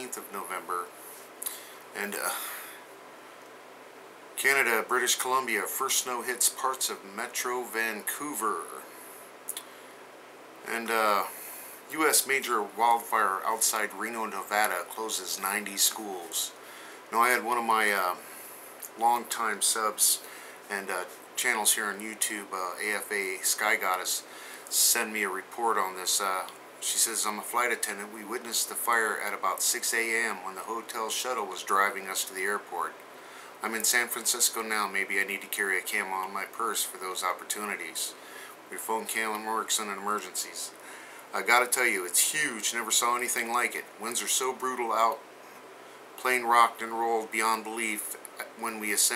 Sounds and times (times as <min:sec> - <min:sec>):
Speech: 0:00.0 - 0:00.9, 0:02.0 - 0:02.6, 0:04.4 - 0:09.6, 0:10.6 - 0:33.0, 0:33.6 - 0:45.2, 0:46.2 - 0:49.1.